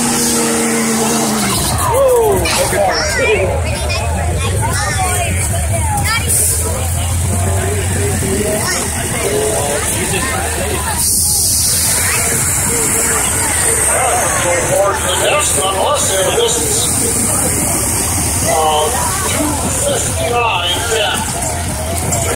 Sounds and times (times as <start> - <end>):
Vehicle: 0.0 - 22.3
Speech: 1.0 - 22.3.